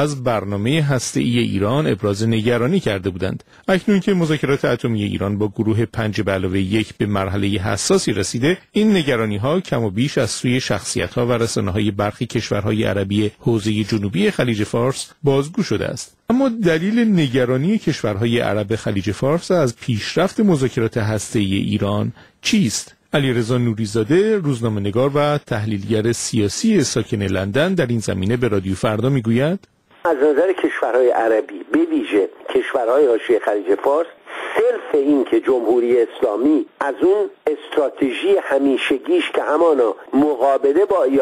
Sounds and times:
Speech: 0:00.0 - 0:41.2.

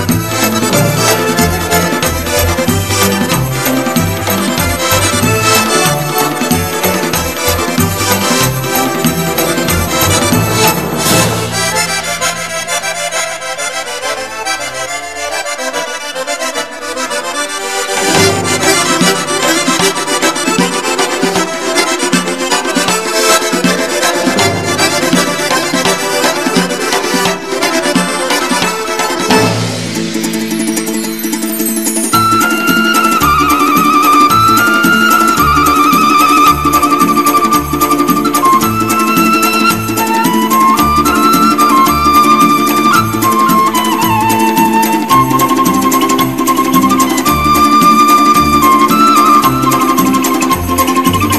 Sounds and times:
Traditional music: 0:00.0 - 0:51.3.

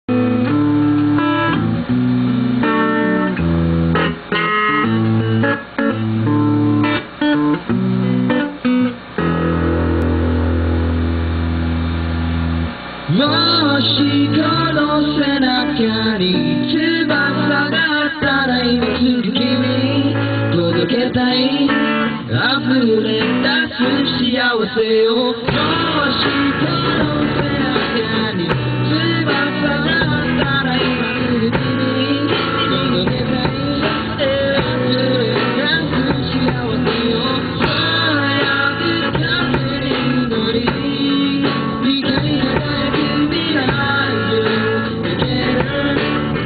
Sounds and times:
Tapping (guitar technique): 0:00.1 - 0:12.8, 0:25.5 - 0:46.4.

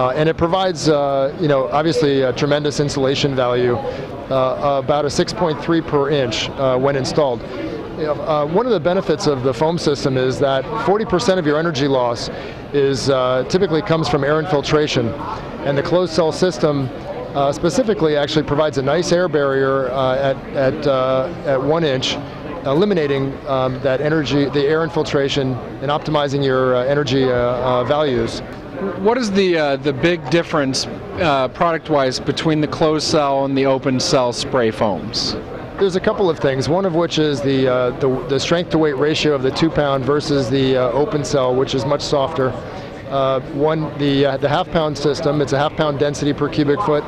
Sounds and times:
Speech: 0:00.0 - 0:47.0.

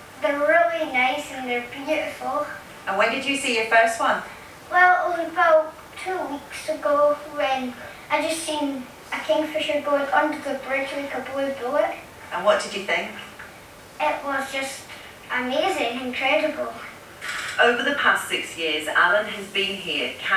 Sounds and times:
Speech: 0:00.2 - 0:13.3, 0:14.0 - 0:17.0, 0:17.6 - 0:20.3.

